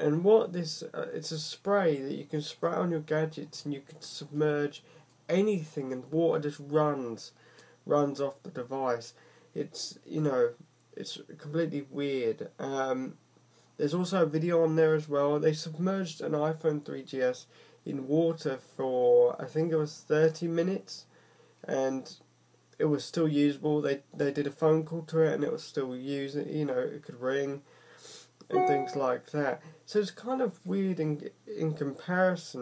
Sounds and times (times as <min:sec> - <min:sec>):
Speech: 0:00.0 - 0:13.2, 0:13.8 - 0:27.7, 0:28.4 - 0:32.6.